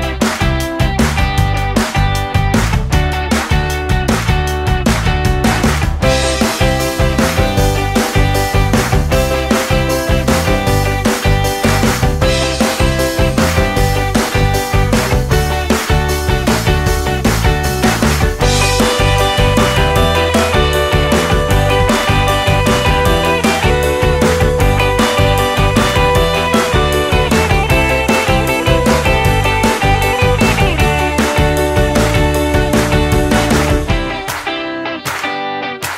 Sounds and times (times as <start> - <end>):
Music: 0.0 - 35.9.